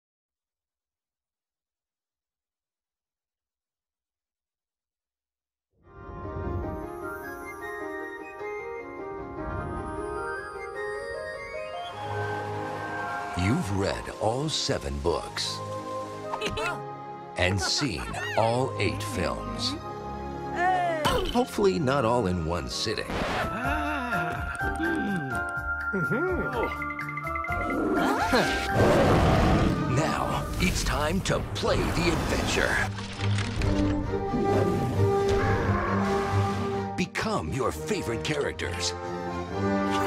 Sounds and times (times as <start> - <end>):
Music: 5.8 - 40.0.